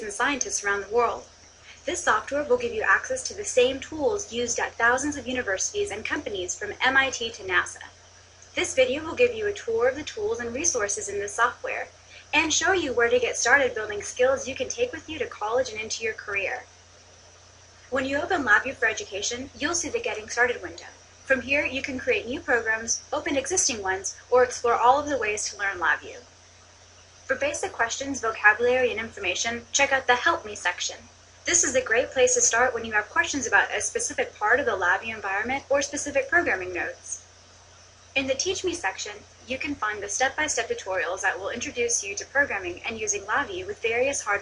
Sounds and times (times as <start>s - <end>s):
Speech: 0.0s - 7.9s, 8.5s - 16.7s, 17.9s - 26.2s, 27.3s - 37.2s, 38.2s - 44.4s.